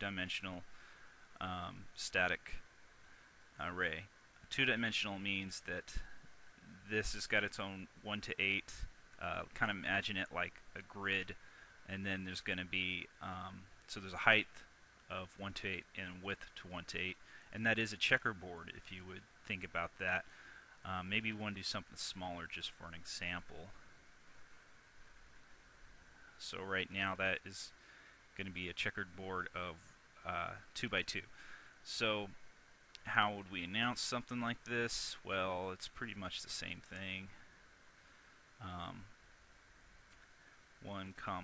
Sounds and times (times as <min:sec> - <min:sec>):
Speech: 0:00.0 - 0:00.7, 0:01.4 - 0:02.7, 0:03.6 - 0:23.8, 0:26.4 - 0:27.8, 0:28.4 - 0:32.4, 0:33.0 - 0:37.4, 0:38.6 - 0:39.1, 0:40.8 - 0:41.4.